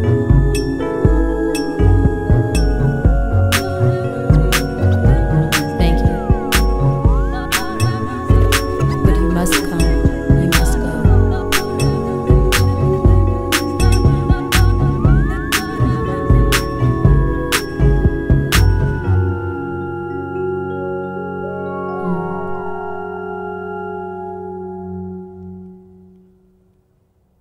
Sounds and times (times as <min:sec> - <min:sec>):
Music: 0:00.0 - 0:27.1.